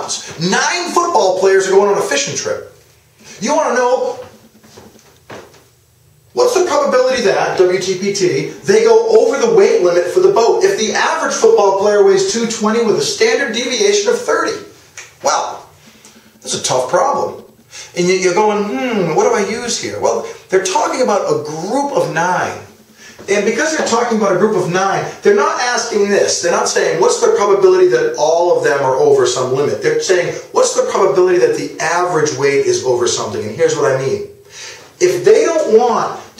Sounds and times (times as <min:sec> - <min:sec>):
Speech: 0:00.0 - 0:02.8, 0:03.4 - 0:04.4, 0:06.4 - 0:15.7, 0:16.4 - 0:34.4, 0:35.0 - 0:36.4.